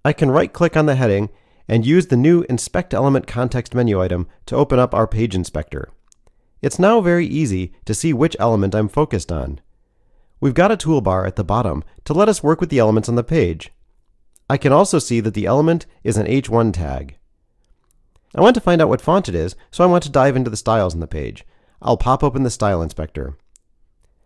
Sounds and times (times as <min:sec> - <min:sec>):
Speech: 0:00.0 - 0:06.0, 0:06.6 - 0:09.6, 0:10.4 - 0:13.8, 0:14.5 - 0:17.2, 0:18.3 - 0:23.4.